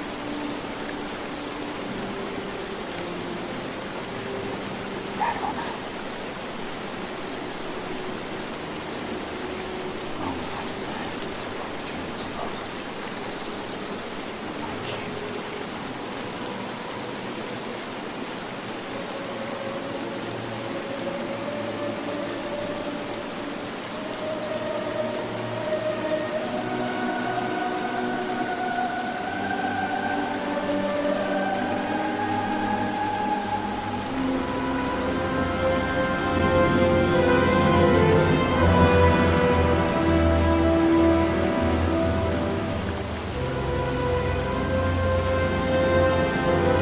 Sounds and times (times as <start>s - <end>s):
Outside, rural or natural: 0.0s - 46.8s
Speech: 5.2s - 5.8s, 10.2s - 12.7s, 14.6s - 15.3s.